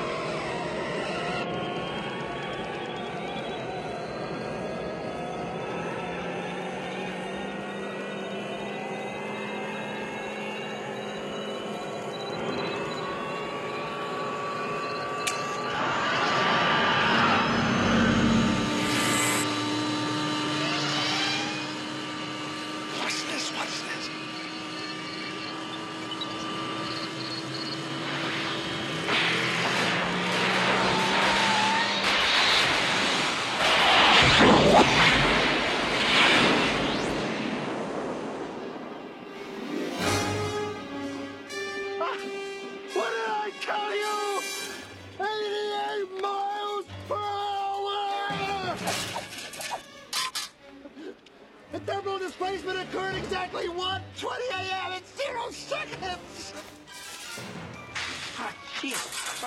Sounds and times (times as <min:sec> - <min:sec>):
Speech: 0:23.0 - 0:24.1, 0:43.0 - 0:44.4, 0:45.2 - 0:48.9, 0:51.7 - 0:56.6
Music: 0:39.3 - 0:59.4.